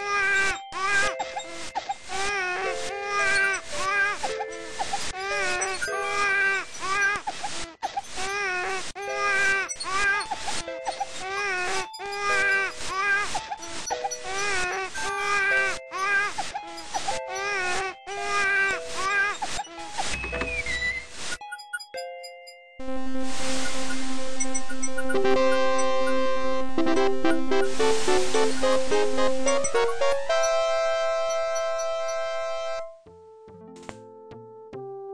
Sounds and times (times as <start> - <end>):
Music: 0.0 - 35.1.